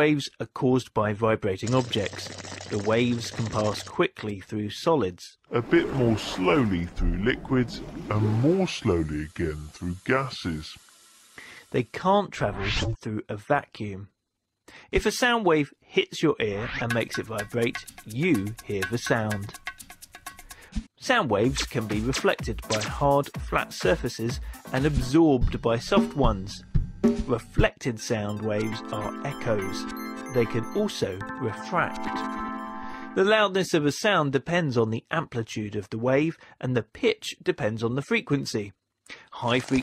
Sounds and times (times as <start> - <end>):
Speech: 0.0 - 10.8, 11.7 - 14.2, 14.8 - 19.6, 21.0 - 32.3, 33.2 - 39.8
Music: 16.8 - 33.3.